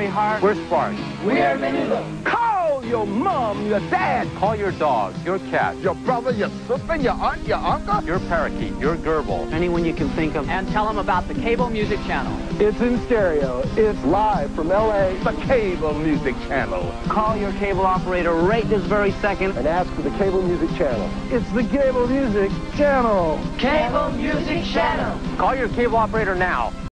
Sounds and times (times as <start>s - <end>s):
Speech: 0.0s - 24.0s, 25.4s - 26.7s
Music: 0.0s - 26.9s.